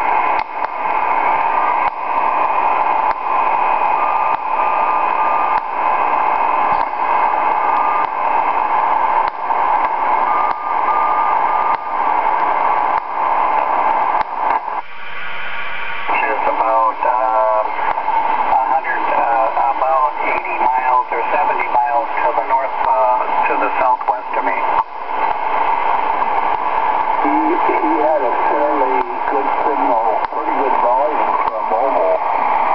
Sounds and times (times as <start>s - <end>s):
Radio: 0.0s - 32.7s
Speech: 16.1s - 17.7s, 18.5s - 24.8s, 27.2s - 32.2s.